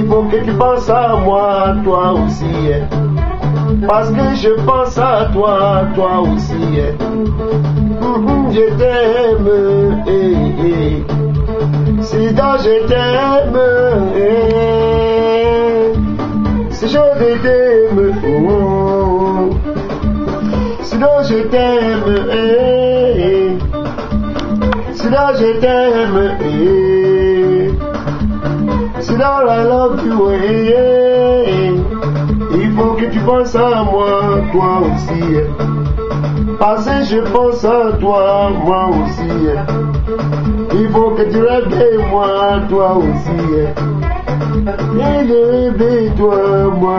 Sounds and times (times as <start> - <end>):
Male singing: 0.0 - 7.2, 7.9 - 11.2, 11.9 - 19.7, 20.5 - 23.8, 24.6 - 27.9, 28.6 - 35.7, 36.5 - 40.0, 40.6 - 46.9
Music: 0.0 - 46.9.